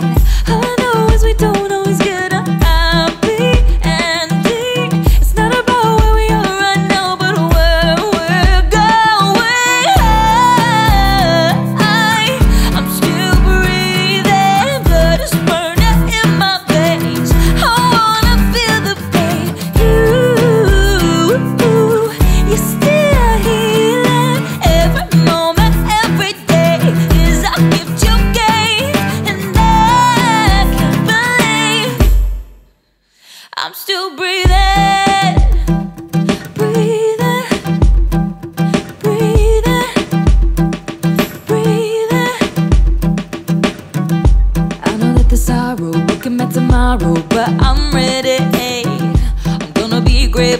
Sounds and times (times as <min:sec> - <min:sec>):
Music: 0:00.0 - 0:33.6, 0:34.4 - 0:50.5.